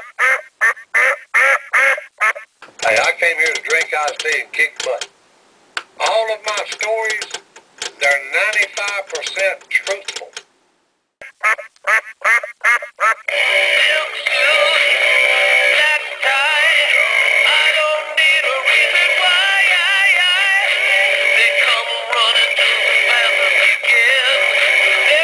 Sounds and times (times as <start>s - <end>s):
Quack: 0.0s - 2.5s, 11.2s - 13.3s
Speech: 2.8s - 5.1s, 6.0s - 7.3s, 8.0s - 10.4s
Music: 13.3s - 25.2s.